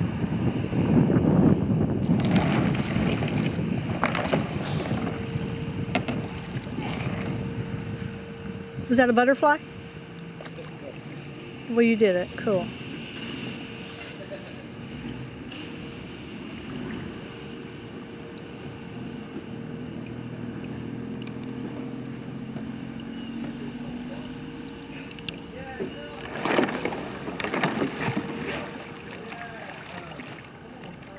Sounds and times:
Wind noise (microphone): 0.0s - 9.2s
Rowboat, canoe, kayak: 0.0s - 31.1s.

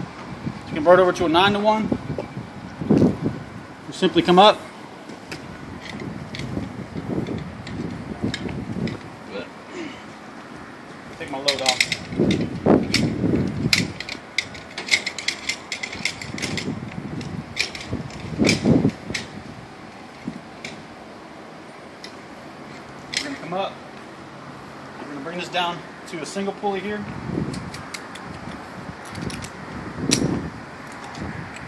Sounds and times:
Mechanisms: 0.0s - 31.6s.

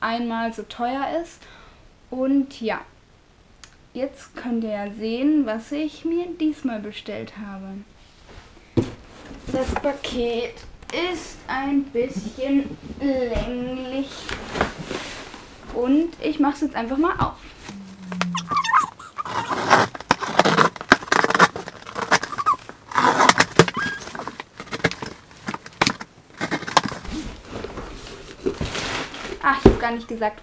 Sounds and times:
Speech: 0.0s - 1.4s, 2.1s - 2.9s, 4.0s - 7.9s, 9.5s - 14.3s, 15.7s - 17.4s, 29.4s - 30.4s.

